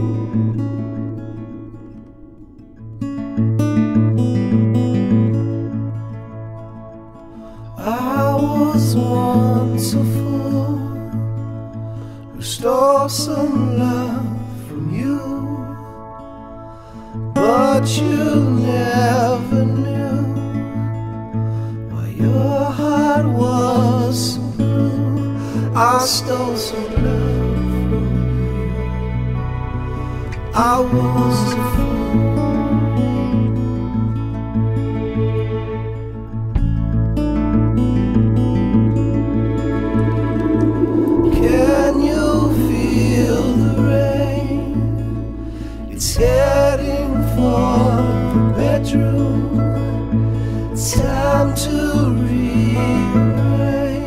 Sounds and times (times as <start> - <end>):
Tender music: 0.0 - 54.0.